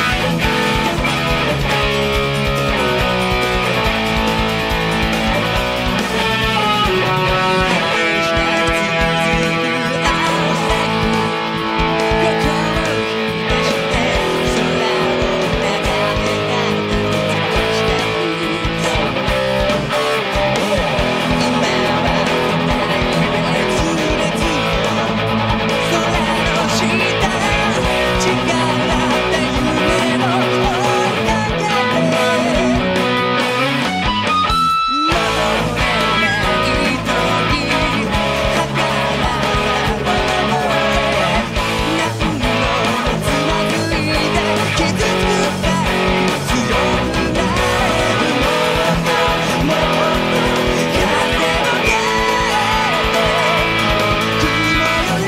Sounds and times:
Electric guitar: 0.0 - 55.2.

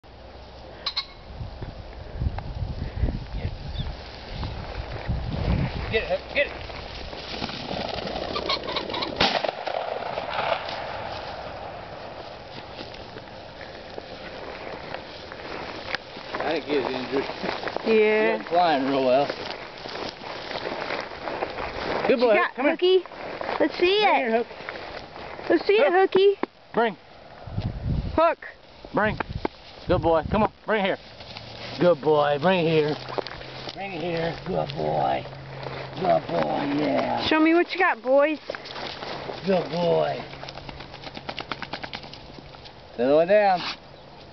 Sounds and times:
Outside, rural or natural: 0.0 - 44.3.

